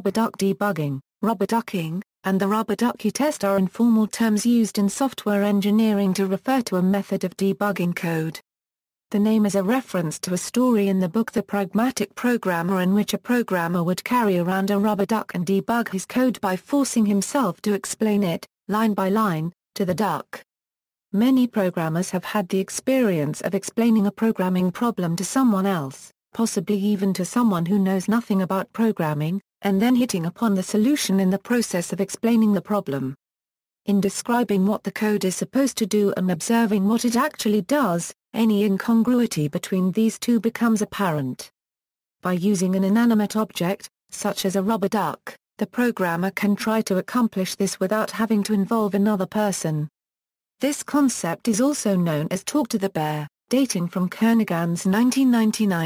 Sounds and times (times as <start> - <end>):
Speech: 0.0 - 8.4, 9.1 - 20.5, 21.2 - 33.2, 33.9 - 41.5, 42.2 - 49.9, 50.6 - 55.8.